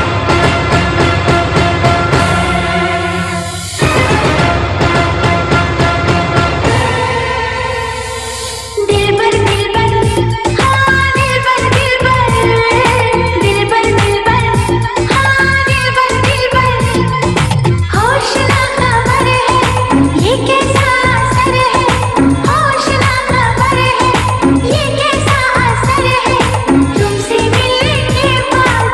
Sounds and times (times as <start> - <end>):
Dance music: 0.0 - 28.9.